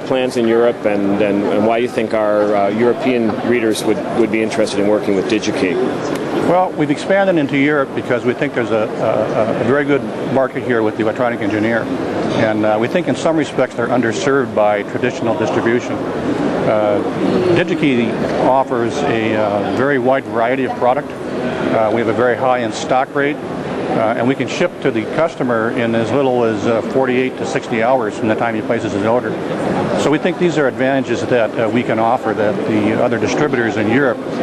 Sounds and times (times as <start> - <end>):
Speech: 0.0 - 16.0, 16.6 - 34.4.